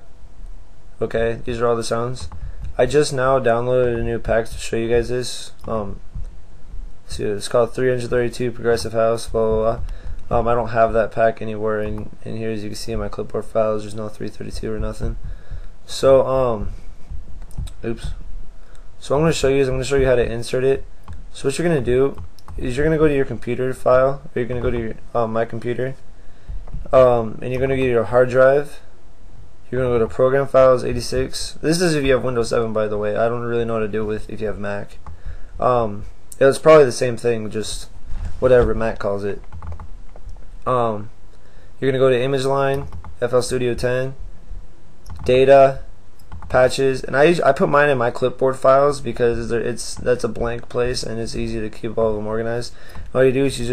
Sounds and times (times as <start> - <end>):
Speech: 1.0 - 6.0, 7.1 - 15.3, 15.9 - 16.8, 17.6 - 18.2, 19.0 - 26.0, 26.8 - 28.9, 29.7 - 35.0, 35.6 - 39.4, 40.6 - 41.2, 41.8 - 44.2, 45.2 - 45.9, 46.5 - 53.7.